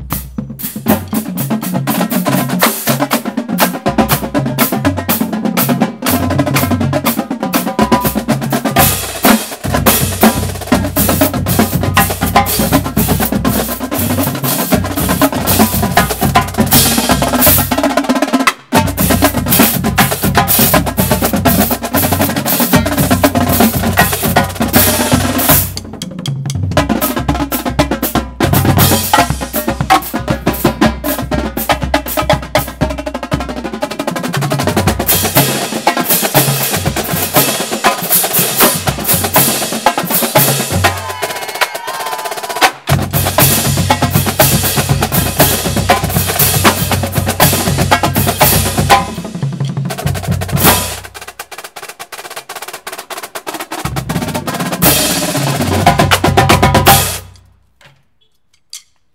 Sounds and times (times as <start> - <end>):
Drum kit: 0.0 - 57.5.